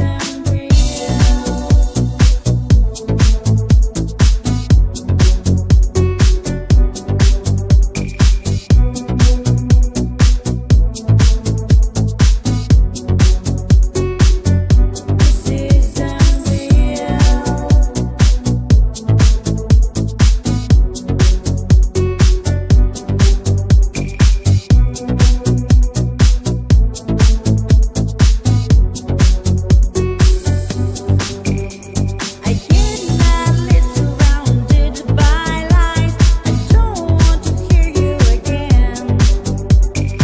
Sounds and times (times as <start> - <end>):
Disco: 0.0 - 40.2.